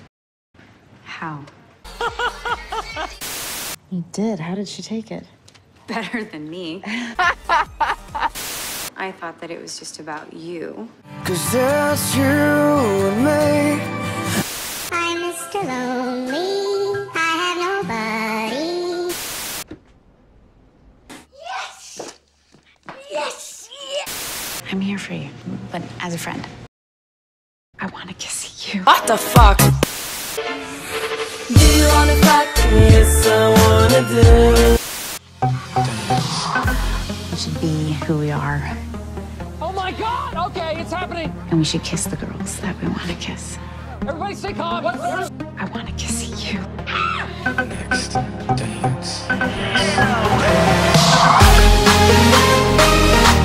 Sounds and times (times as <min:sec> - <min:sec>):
Music: 0:11.0 - 0:19.0, 0:28.9 - 0:53.4.